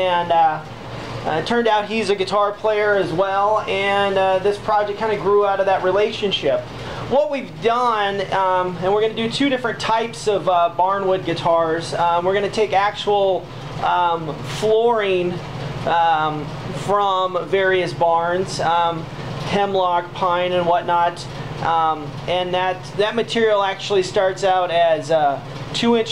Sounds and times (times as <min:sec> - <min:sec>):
Speech: 0:00.0 - 0:26.1.